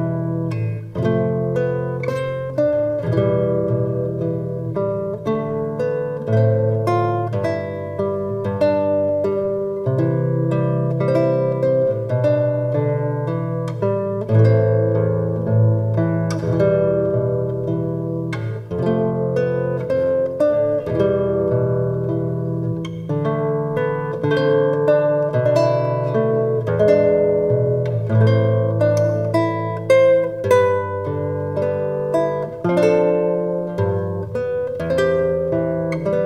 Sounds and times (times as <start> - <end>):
Strum: 0.0 - 36.2.